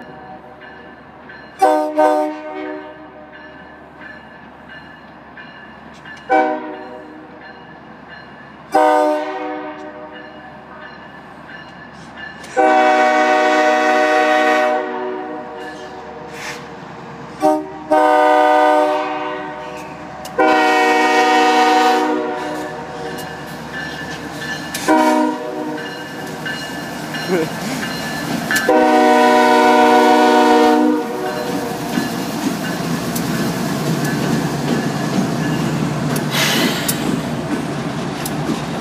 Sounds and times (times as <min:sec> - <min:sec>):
Train horn: 0:01.6 - 0:03.3, 0:06.3 - 0:07.3, 0:08.7 - 0:10.2, 0:12.6 - 0:16.4, 0:17.4 - 0:23.2, 0:24.8 - 0:25.9, 0:28.6 - 0:31.7.